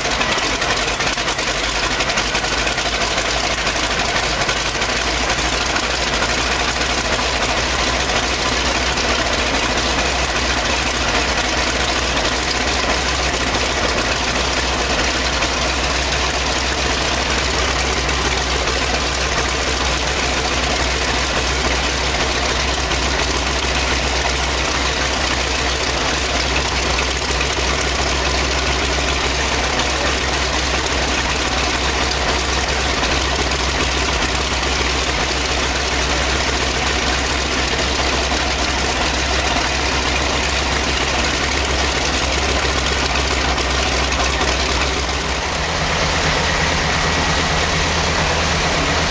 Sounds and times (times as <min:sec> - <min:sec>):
Jet engine: 0:00.0 - 0:49.1.